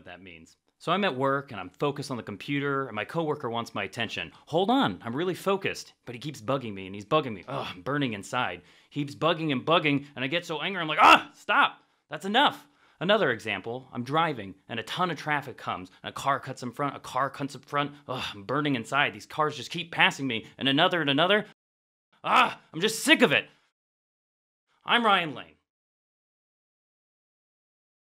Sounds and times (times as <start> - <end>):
Speech: 0.0 - 21.6, 22.2 - 23.5, 24.9 - 25.6.